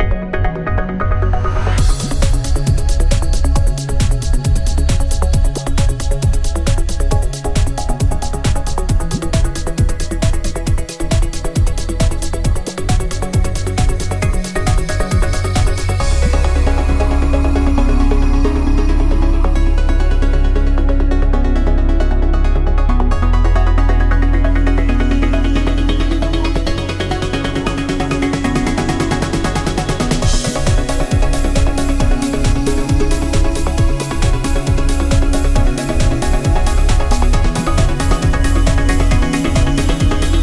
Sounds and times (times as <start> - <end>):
Music: 0.0 - 40.4.